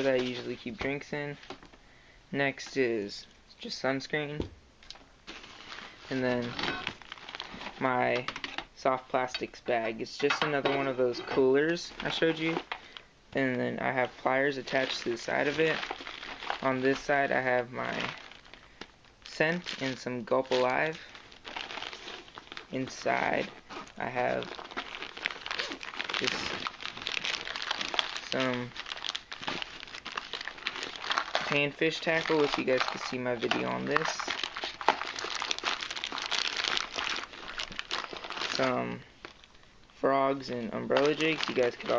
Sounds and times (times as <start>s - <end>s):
Inside, small room: 0.0s - 41.9s
Speech: 2.4s - 4.5s, 6.1s - 6.9s, 7.8s - 12.6s, 13.4s - 15.8s, 16.6s - 18.2s, 19.3s - 21.1s, 22.7s - 24.5s, 28.3s - 28.8s, 31.4s - 34.3s, 38.6s - 39.0s, 40.0s - 41.9s
Crumpling, crinkling: 5.3s - 9.5s, 11.7s - 13.1s, 14.0s - 39.7s, 40.3s - 41.9s.